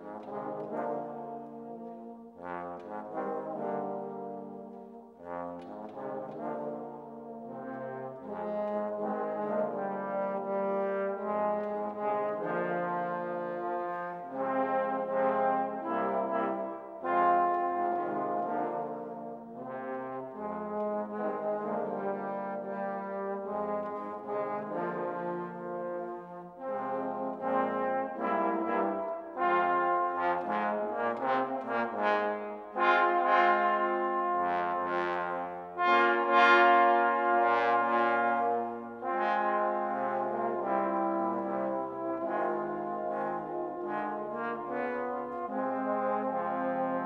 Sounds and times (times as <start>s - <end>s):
Music: 0.0s - 47.0s.